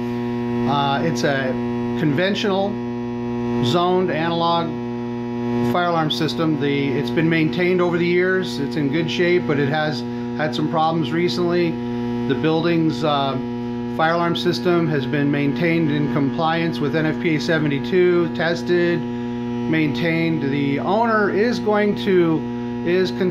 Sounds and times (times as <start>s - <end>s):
Speech: 0.6s - 2.8s, 3.6s - 4.8s, 5.7s - 19.1s, 19.7s - 23.3s.